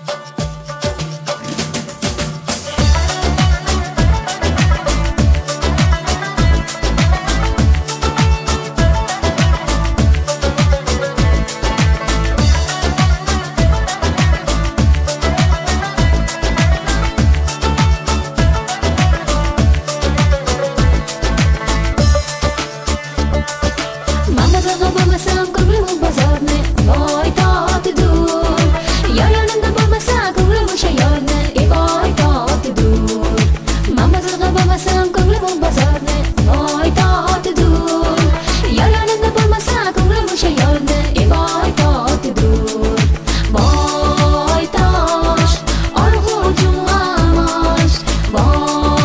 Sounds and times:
Music: 0.0s - 49.0s.

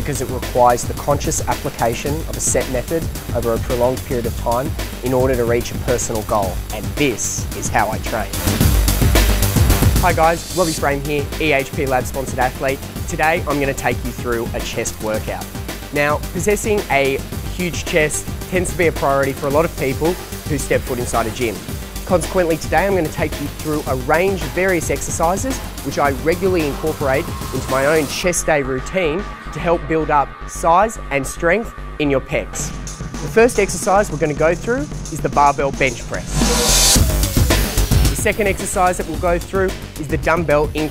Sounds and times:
Speech: 0.0s - 8.4s, 10.0s - 15.4s, 16.0s - 36.4s, 38.1s - 40.9s
Music: 0.0s - 40.9s.

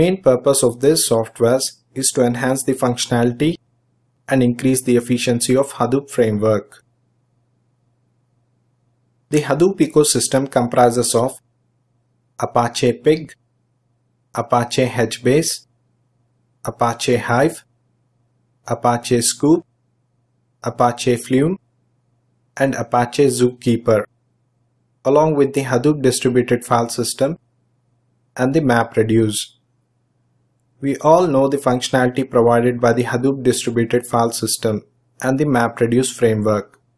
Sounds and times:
Speech: 0.0s - 3.6s, 4.3s - 6.8s, 9.3s - 11.4s, 12.4s - 13.4s, 14.4s - 15.6s, 16.7s - 17.6s, 18.7s - 19.6s, 20.6s - 21.6s, 22.6s - 24.1s, 25.1s - 27.4s, 28.4s - 29.5s, 30.8s - 36.7s.

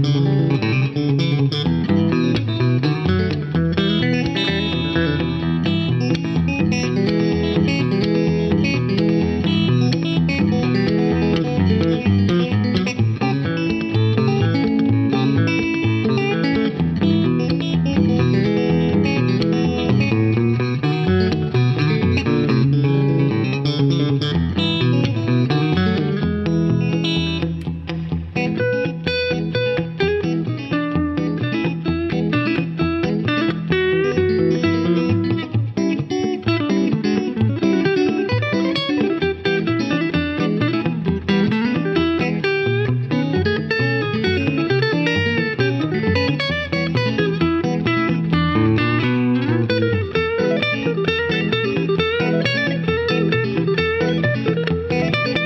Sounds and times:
Electric guitar: 0.0s - 55.4s.

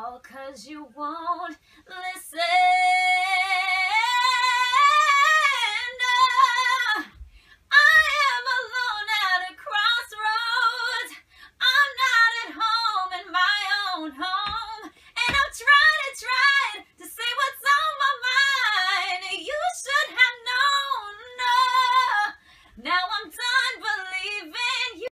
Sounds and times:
Female singing: 0.0s - 25.1s.

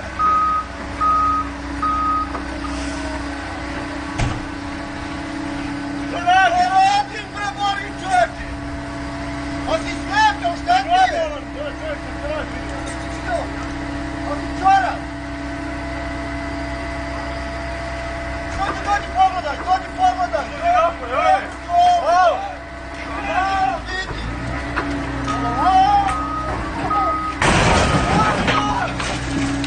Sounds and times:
Speech: 6.1s - 8.5s, 9.7s - 13.6s, 14.2s - 15.1s, 18.6s - 24.3s.

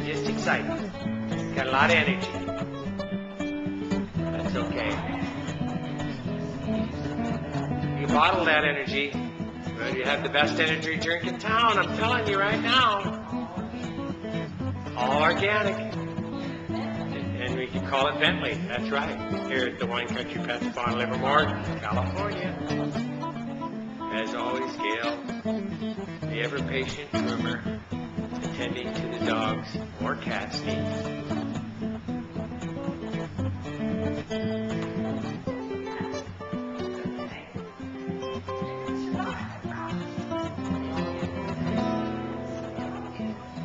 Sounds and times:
Speech: 0.0s - 0.8s, 1.6s - 2.3s, 8.0s - 9.2s, 9.8s - 13.2s, 15.0s - 15.9s, 17.0s - 22.8s, 24.1s - 25.2s, 26.2s - 27.7s, 28.5s - 30.7s
Music: 0.0s - 43.6s.

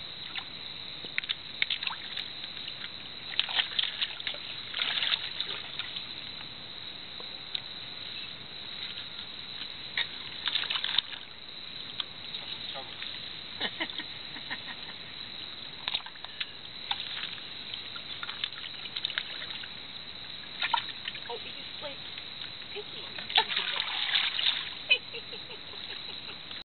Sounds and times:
Speech: 21.3s - 22.0s, 22.7s - 23.7s.

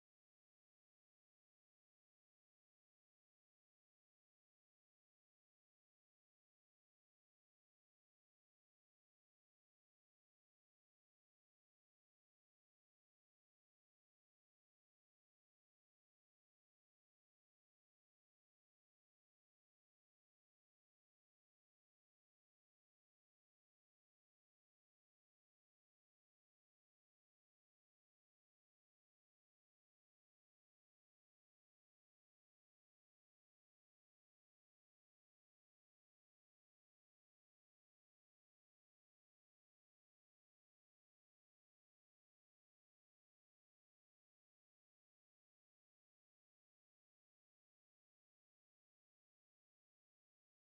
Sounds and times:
Silence: 0.0s - 50.7s.

